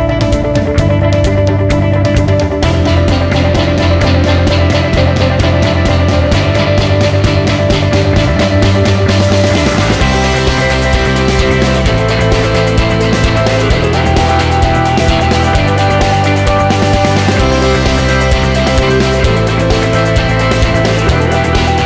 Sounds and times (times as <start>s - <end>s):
Music: 0.0s - 21.8s.